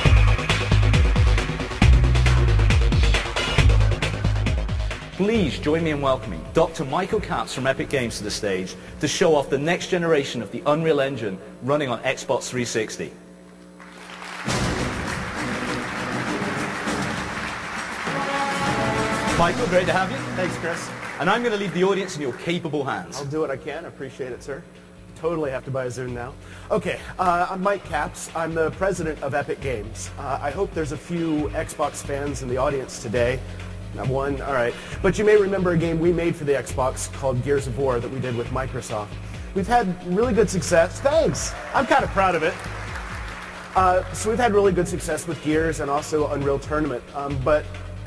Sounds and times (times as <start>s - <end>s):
Music: 0.0s - 10.4s, 13.9s - 48.0s
Speech: 5.2s - 13.2s, 19.4s - 24.6s, 25.2s - 33.4s, 34.0s - 42.6s, 43.8s - 47.7s.